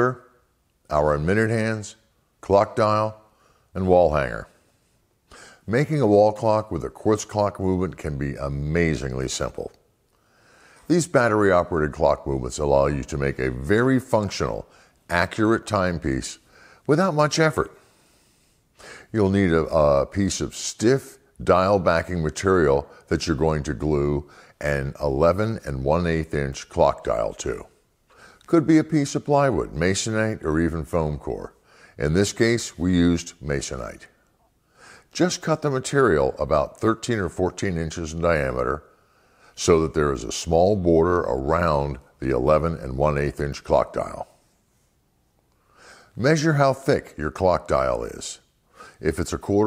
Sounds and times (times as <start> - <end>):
Speech: 0.0 - 4.6, 5.6 - 9.8, 10.9 - 17.8, 19.0 - 27.8, 28.4 - 34.2, 35.1 - 38.9, 39.5 - 44.4, 46.2 - 49.6.